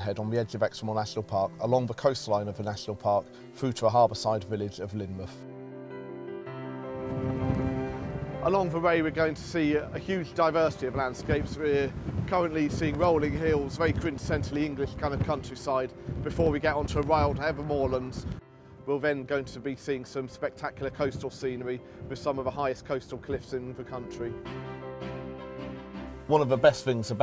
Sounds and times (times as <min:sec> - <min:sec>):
Speech: 0:00.0 - 0:05.4, 0:08.4 - 0:18.2, 0:18.9 - 0:24.4, 0:26.3 - 0:27.2
Music: 0:00.0 - 0:27.2.